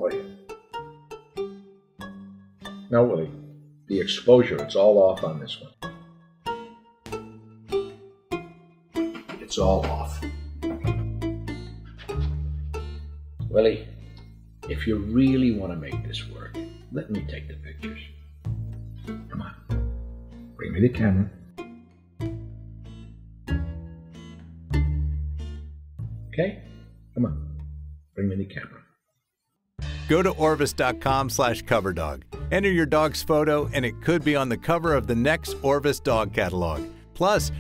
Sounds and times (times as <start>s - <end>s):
Music: 0.0s - 28.8s, 29.4s - 37.6s
Speech: 2.9s - 5.7s, 9.4s - 10.2s, 13.5s - 13.8s, 14.7s - 18.1s, 20.6s - 21.4s, 28.2s - 28.8s, 30.1s - 37.6s.